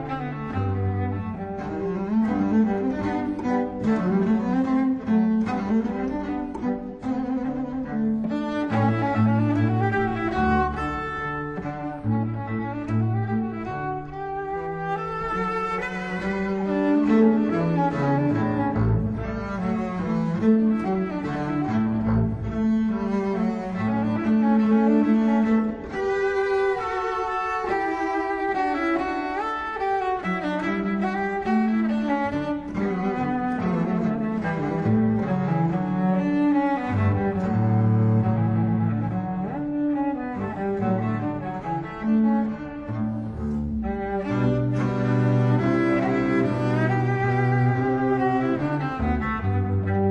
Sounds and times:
Cello: 0.0 - 50.1.

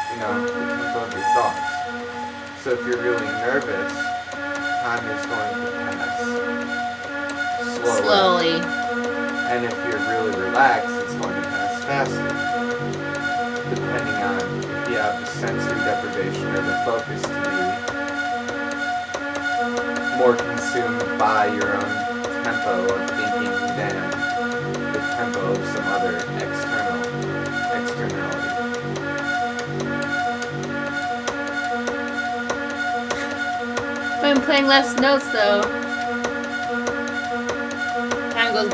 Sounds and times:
Inside, small room: 0.0 - 38.7
Music: 0.0 - 38.7
Speech: 0.1 - 1.6, 2.6 - 4.0, 4.8 - 6.4, 7.6 - 8.7, 9.5 - 12.3, 13.9 - 17.8, 20.2 - 24.1, 25.0 - 27.0, 27.6 - 28.6, 34.2 - 35.7, 38.4 - 38.7.

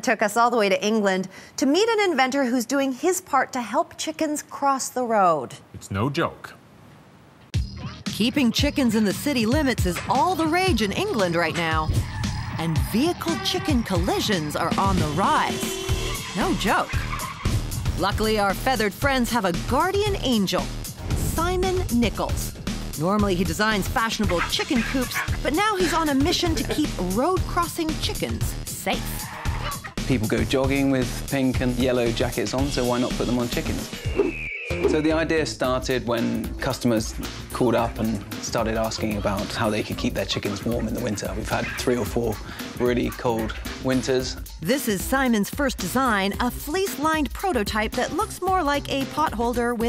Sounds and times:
Music: 7.6 - 49.8
Speech: 23.0 - 29.1.

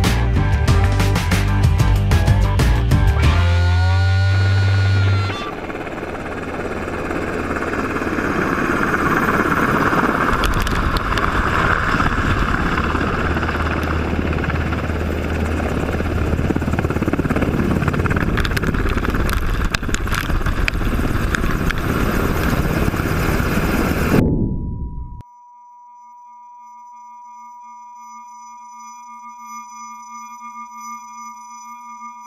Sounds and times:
Helicopter: 3.1 - 24.3.

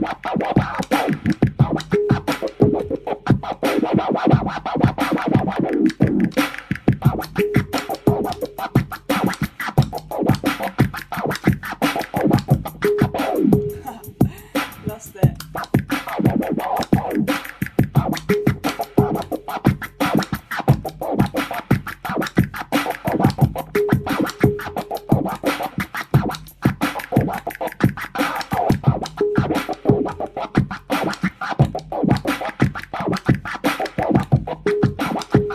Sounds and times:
Scratching (performance technique): 0.0 - 35.5.

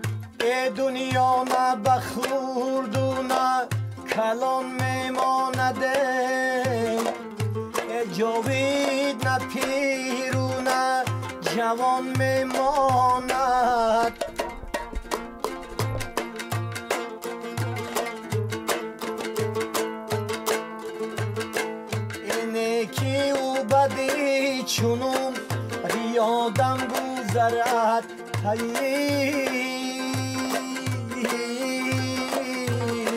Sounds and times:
Music: 0.0 - 33.1.

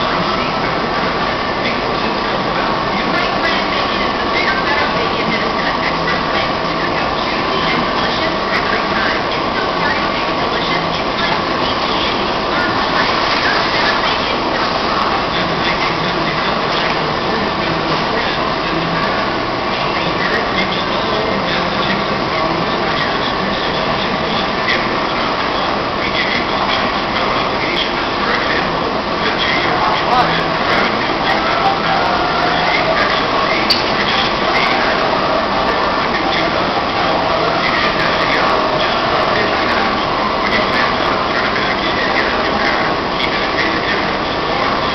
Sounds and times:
Speech: 0.0 - 44.9.

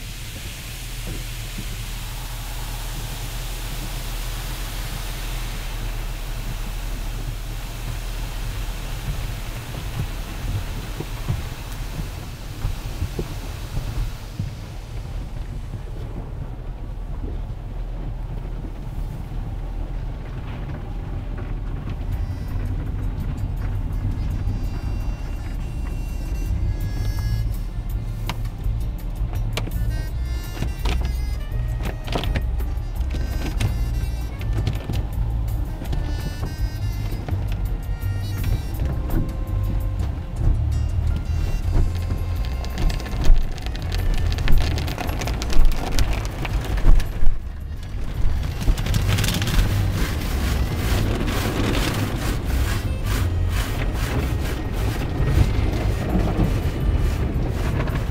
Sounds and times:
Music: 22.1 - 46.7, 47.5 - 58.1.

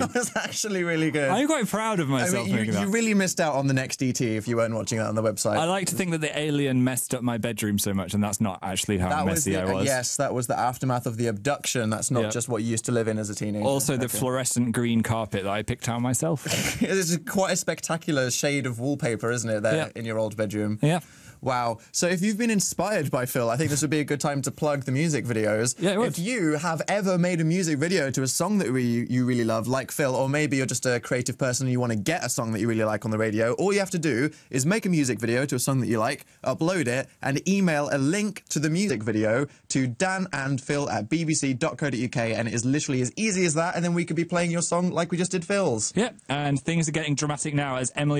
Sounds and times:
Speech: 0.0 - 48.1.

